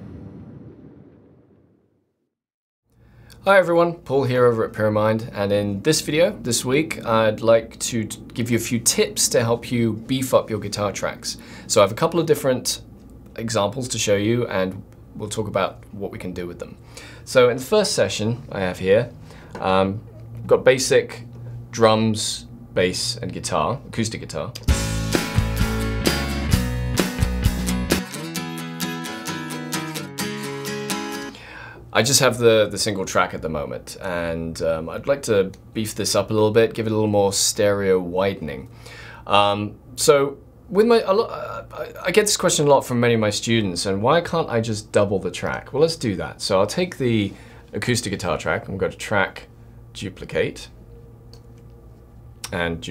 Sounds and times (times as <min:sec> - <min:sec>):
Speech: 0:03.4 - 0:24.6, 0:31.9 - 0:50.8, 0:52.4 - 0:52.9
Guitar: 0:24.6 - 0:31.8.